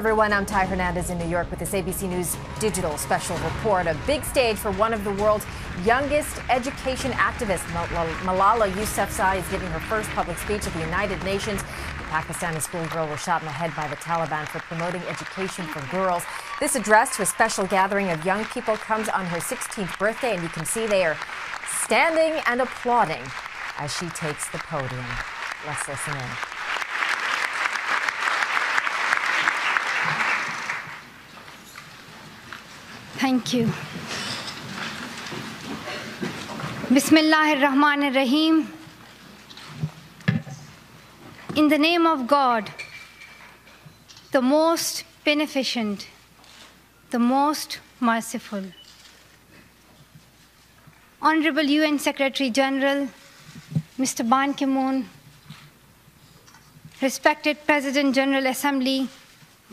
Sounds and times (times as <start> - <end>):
Female speech, woman speaking: 0.0 - 26.4, 33.2 - 33.8, 36.9 - 38.8, 41.5 - 42.8, 44.4 - 46.2, 47.1 - 48.8, 51.2 - 53.2, 54.0 - 55.2, 57.0 - 59.7
Narration, monologue: 0.0 - 26.8, 36.4 - 59.7.